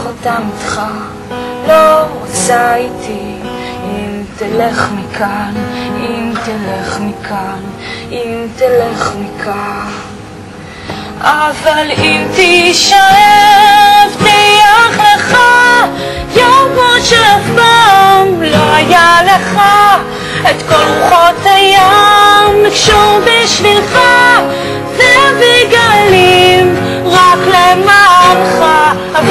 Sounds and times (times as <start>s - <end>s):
Music: 0.0s - 29.3s.